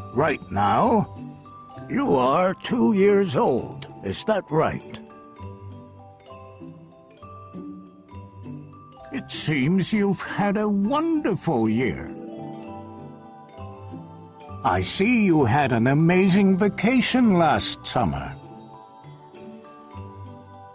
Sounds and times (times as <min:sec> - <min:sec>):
Wind chime: 0:00.0 - 0:20.7
Speech: 0:00.1 - 0:01.1, 0:01.9 - 0:05.0, 0:09.2 - 0:12.2, 0:14.7 - 0:18.4.